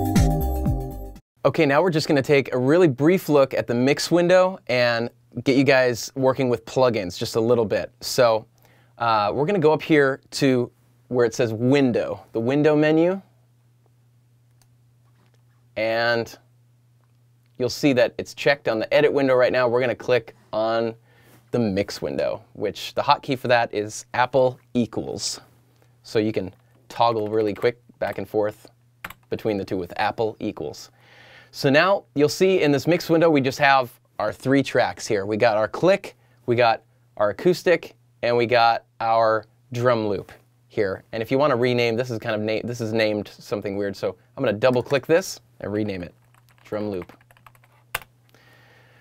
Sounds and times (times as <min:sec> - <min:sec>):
Speech: 0:01.4 - 0:13.3, 0:15.8 - 0:16.5, 0:17.6 - 0:30.9, 0:31.5 - 0:47.2.